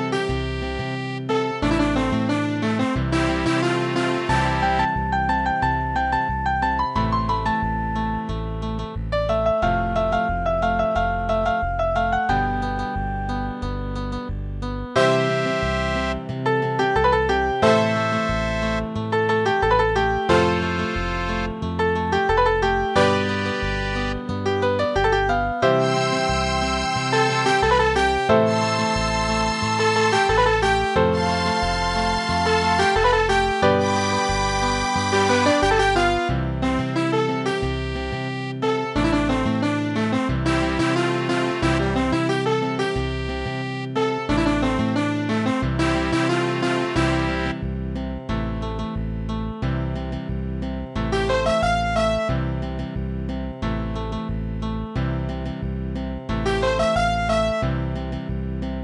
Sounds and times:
Musical instrument: 0.0 - 8.3, 15.0 - 47.8, 51.2 - 52.3, 56.5 - 57.7.

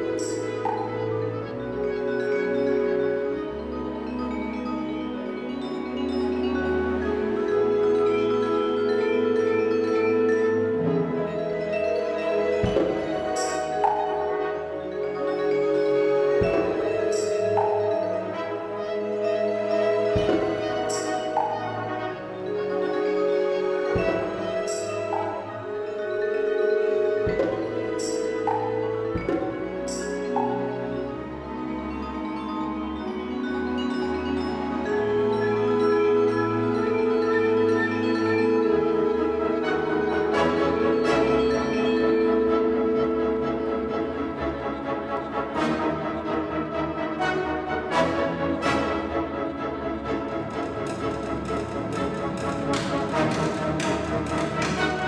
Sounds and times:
Bowed string instrument: 0.0 - 55.0
Orchestra: 0.0 - 55.0.

